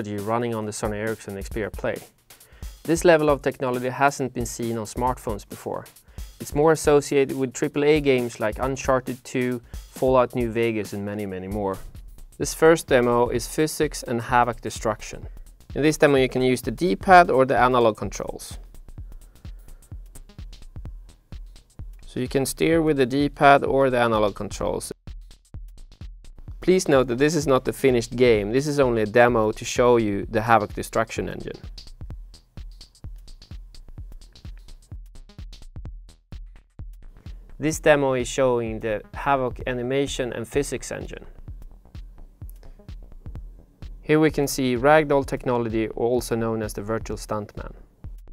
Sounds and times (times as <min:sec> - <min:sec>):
Speech: 0:00.0 - 0:02.1, 0:02.9 - 0:18.6, 0:22.1 - 0:25.0, 0:26.6 - 0:31.6, 0:37.6 - 0:41.3, 0:44.0 - 0:47.8
Music: 0:00.0 - 0:48.3.